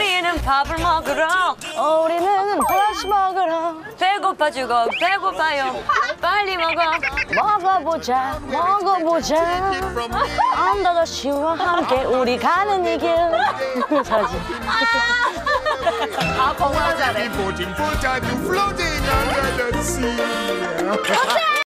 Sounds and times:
Male singing: 0:00.0 - 0:02.6, 0:07.5 - 0:21.4
Music: 0:00.0 - 0:21.6.

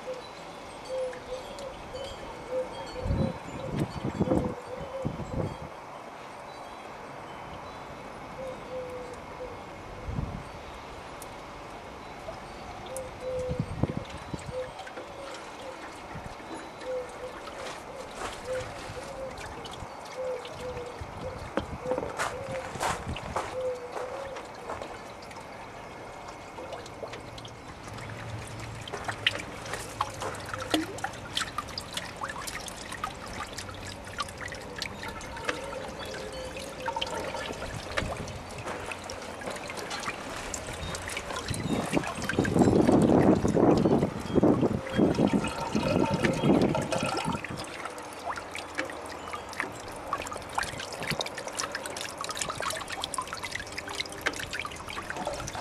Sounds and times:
Water: 0:00.0 - 0:55.6
Water tap, faucet: 0:44.8 - 0:48.9.

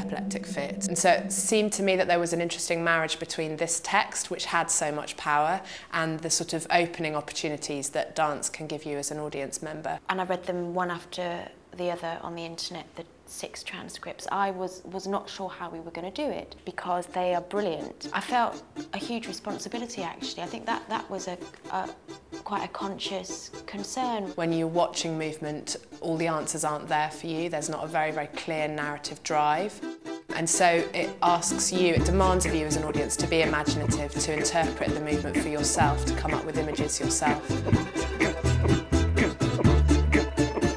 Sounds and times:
Speech: 0:00.0 - 0:37.4.

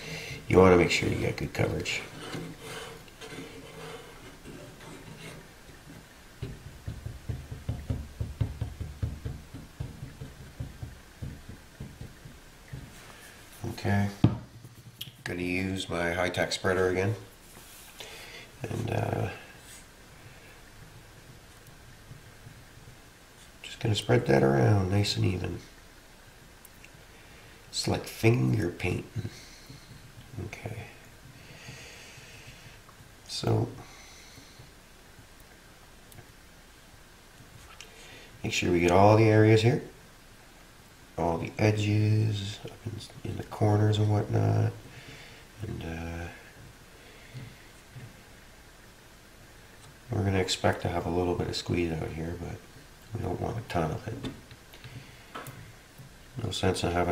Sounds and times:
Speech: 0:00.5 - 0:02.2, 0:13.6 - 0:14.2, 0:15.2 - 0:17.3, 0:18.6 - 0:19.4, 0:23.6 - 0:25.7, 0:27.7 - 0:29.4, 0:30.4 - 0:31.0, 0:33.3 - 0:33.8, 0:38.4 - 0:40.0, 0:41.2 - 0:44.8, 0:45.6 - 0:46.4, 0:50.1 - 0:54.4, 0:56.4 - 0:57.1.

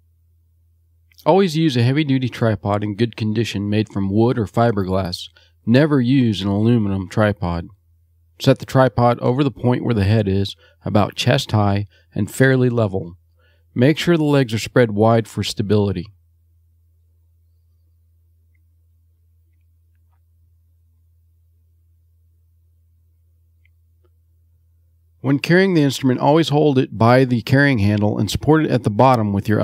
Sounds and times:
Speech: 0:01.2 - 0:07.8, 0:08.4 - 0:13.2, 0:13.8 - 0:16.2, 0:25.2 - 0:29.6.

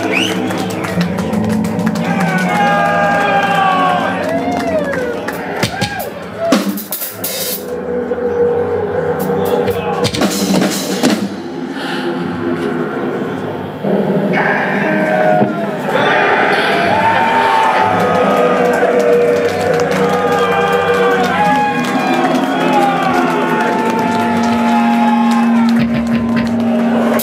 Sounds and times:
Applause: 0:00.0 - 0:06.1, 0:17.3 - 0:27.2
Crowd: 0:00.0 - 0:27.2
Inside, large room or hall: 0:00.0 - 0:27.2
Music: 0:00.0 - 0:27.2.

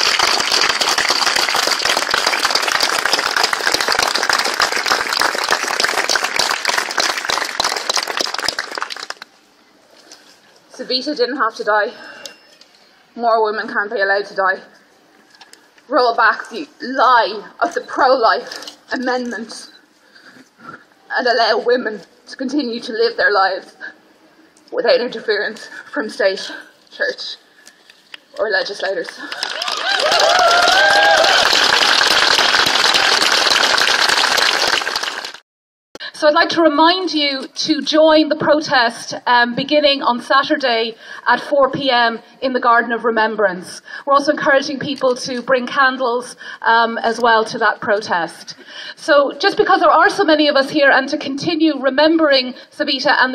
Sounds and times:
Outside, urban or manmade: 0:00.0 - 0:35.4, 0:36.0 - 0:53.3
Breathing: 0:11.9 - 0:12.6, 0:20.0 - 0:21.0, 0:25.6 - 0:26.8, 0:41.0 - 0:41.3, 0:43.8 - 0:44.1, 0:46.4 - 0:46.7, 0:48.5 - 0:49.0, 0:52.5 - 0:52.8.

